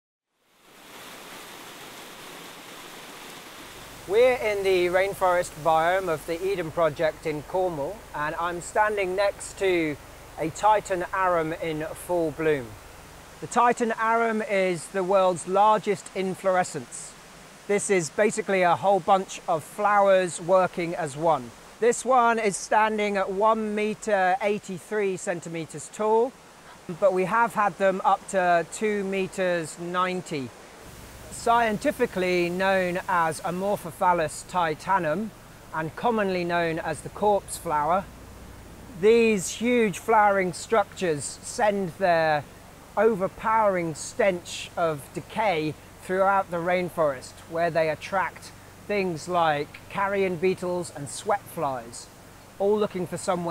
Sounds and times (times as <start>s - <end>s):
Outside, rural or natural: 0.2s - 53.5s
Speech: 4.1s - 12.8s, 13.4s - 30.5s, 31.3s - 38.1s, 39.0s - 42.4s, 43.0s - 53.5s.